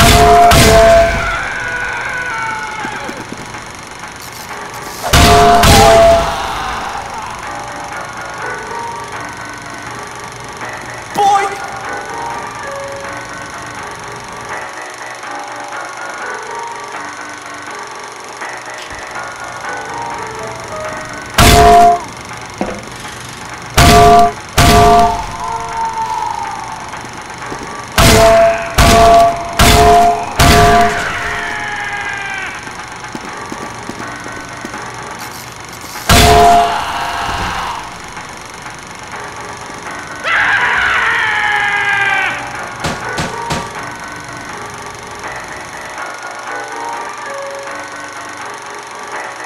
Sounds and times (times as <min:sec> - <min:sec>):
Music: 0:00.0 - 0:49.4.